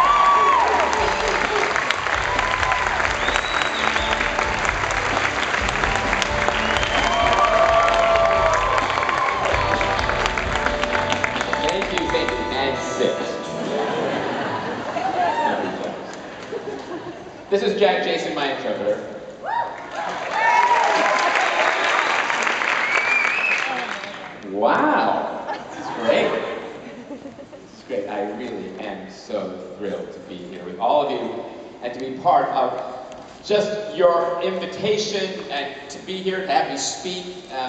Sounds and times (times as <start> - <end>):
Music: 0.1 - 14.2
Male speech, man speaking: 11.6 - 13.5, 17.5 - 19.2, 24.4 - 25.3, 25.9 - 26.6, 27.9 - 37.6.